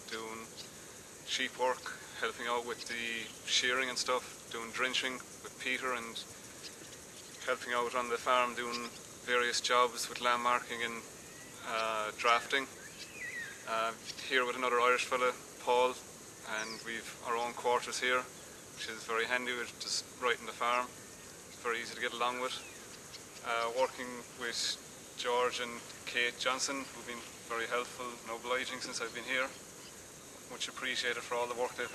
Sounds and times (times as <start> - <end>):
Speech: 0.0 - 0.5, 1.3 - 6.3, 7.4 - 12.7, 13.7 - 20.9, 21.6 - 22.6, 23.4 - 29.6, 30.5 - 31.9.